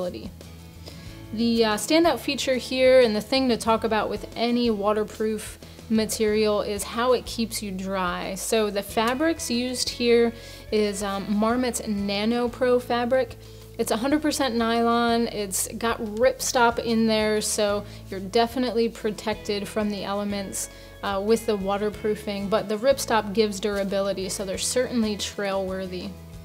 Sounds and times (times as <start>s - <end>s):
Speech: 0.0s - 0.3s, 1.4s - 26.1s
Music: 0.0s - 26.4s.